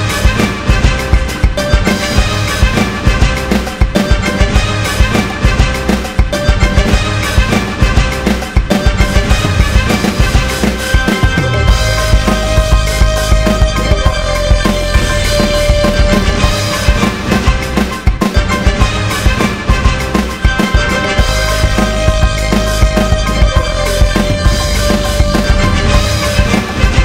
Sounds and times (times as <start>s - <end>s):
Music: 0.0s - 27.0s.